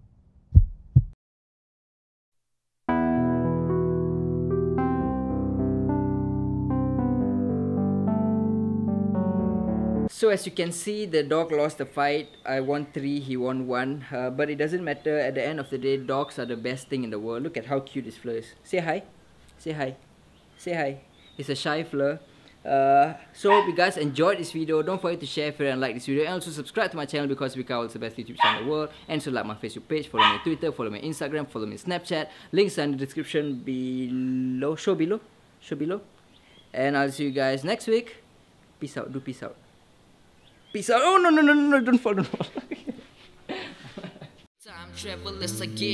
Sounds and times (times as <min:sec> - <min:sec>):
Speech: 0:10.1 - 0:20.0, 0:20.6 - 0:36.1, 0:36.8 - 0:38.2, 0:38.8 - 0:39.6, 0:40.8 - 0:42.4
Outside, urban or manmade: 0:10.1 - 0:37.6
Dog: 0:23.5 - 0:23.8, 0:28.4 - 0:28.7, 0:30.2 - 0:30.5.